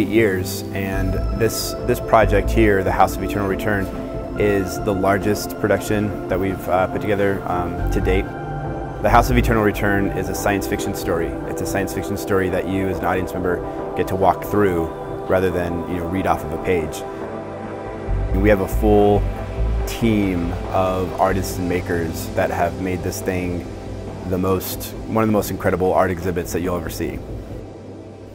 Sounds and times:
Speech: 0.0 - 8.3, 9.0 - 17.1, 18.3 - 27.2
Music: 0.0 - 28.3.

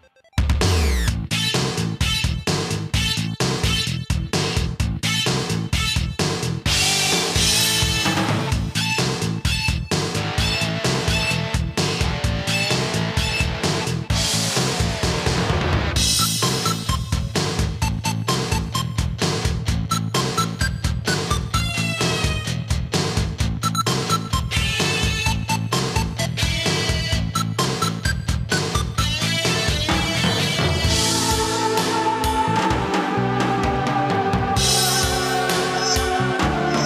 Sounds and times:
Music: 0.0 - 36.8.

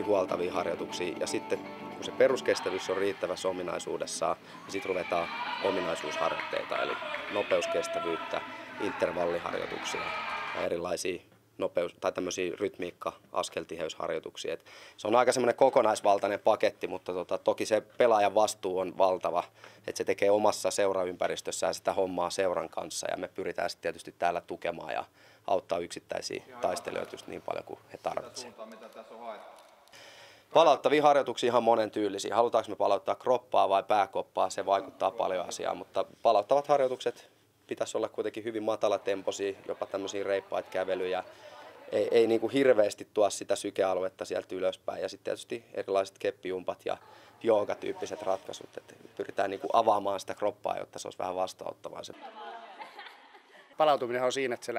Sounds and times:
Speech: 0.0 - 29.6, 30.5 - 52.2, 53.8 - 54.7.

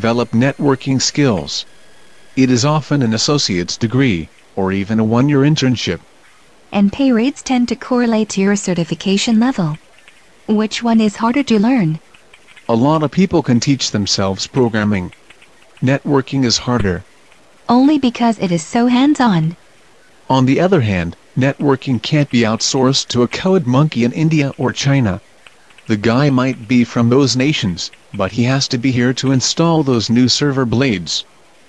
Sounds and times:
Speech synthesizer: 0.0 - 1.6, 2.4 - 6.0, 6.8 - 9.8, 10.5 - 12.0, 12.7 - 15.1, 15.8 - 17.0, 17.7 - 19.6, 20.3 - 25.2, 25.9 - 31.2.

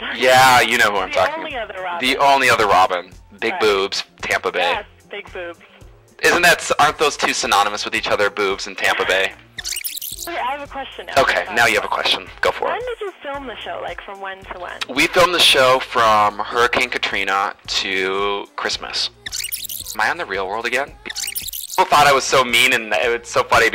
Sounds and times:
Music: 0.0 - 23.7.

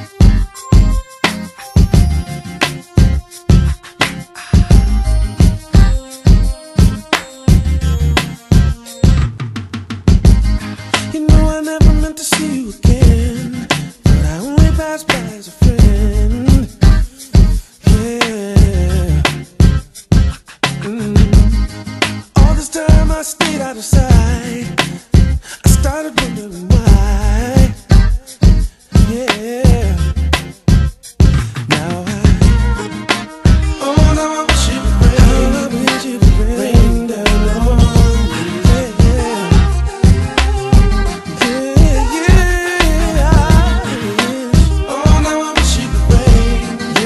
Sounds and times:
Music: 0.0 - 47.0.

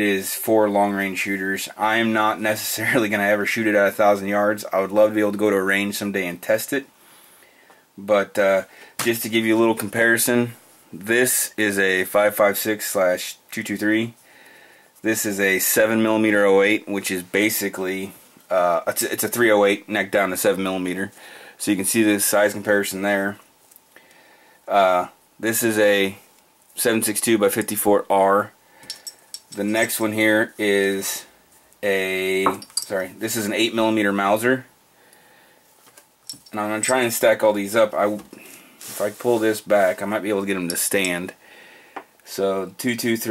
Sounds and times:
Speech: 0.0 - 6.9, 8.0 - 14.2, 15.0 - 23.4, 24.7 - 26.2, 26.8 - 28.6, 29.6 - 34.7, 36.5 - 38.3, 38.9 - 41.4, 42.2 - 43.3
Inside, small room: 0.0 - 43.3.

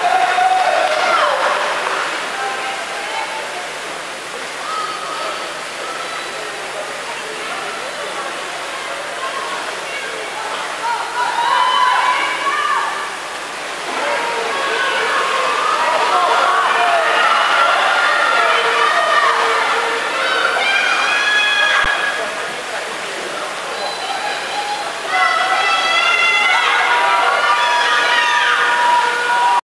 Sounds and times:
Speech: 0.1 - 29.6.

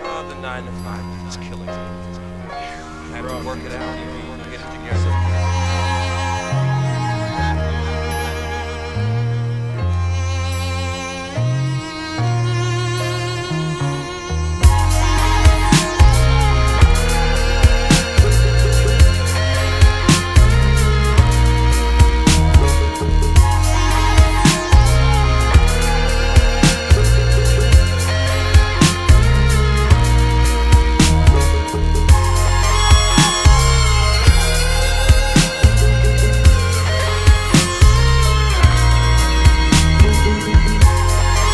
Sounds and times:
Music: 0.0 - 41.5.

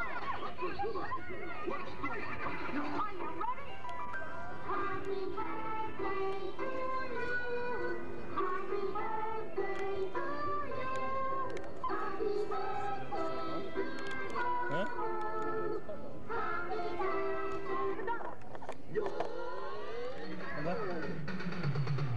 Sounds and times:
Music: 0.0 - 22.1.

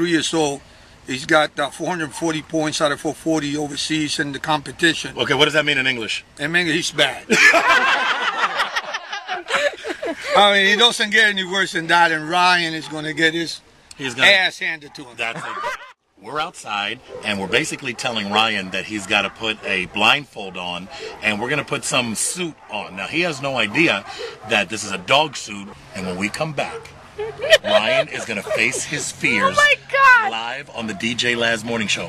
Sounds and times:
Speech: 0.0 - 7.3, 10.4 - 15.5, 16.2 - 26.9, 27.5 - 32.0.

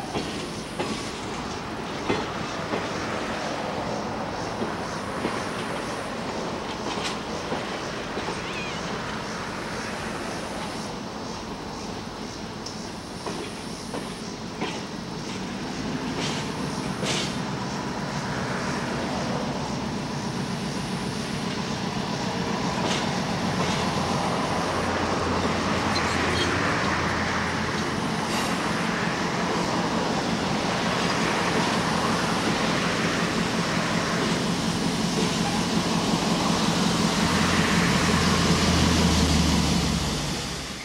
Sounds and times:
Train: 0.0 - 40.8.

